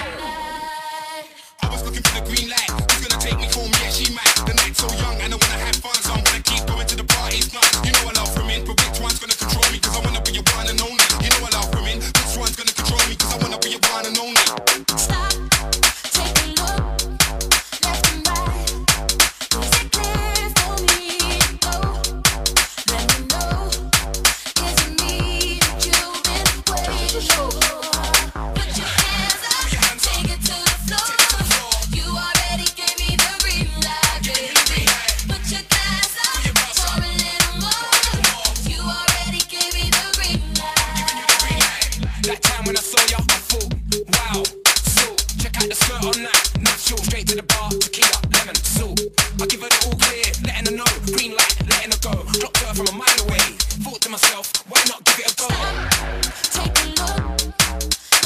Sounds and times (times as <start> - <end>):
Music: 0.0 - 58.2.